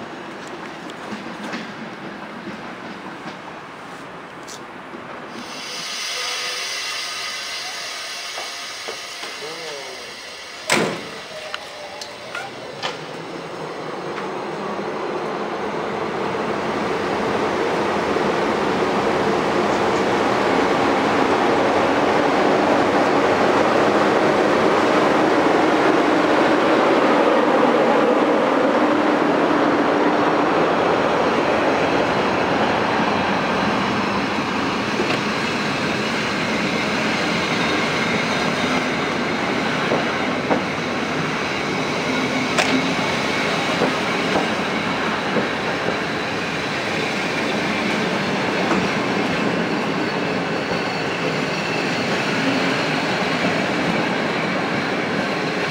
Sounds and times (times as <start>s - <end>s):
Railroad car, train wagon: 0.0s - 55.7s
Subway, metro, underground: 0.0s - 55.7s
Train: 0.0s - 55.7s
Clickety-clack: 0.4s - 3.4s, 39.9s - 40.7s, 42.6s - 42.9s, 43.8s - 44.6s, 45.3s - 46.0s.